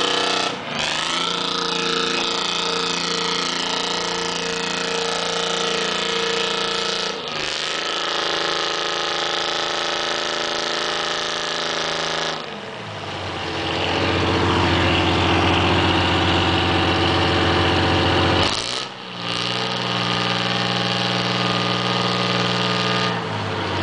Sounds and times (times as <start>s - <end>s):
Vehicle: 0.0s - 23.8s.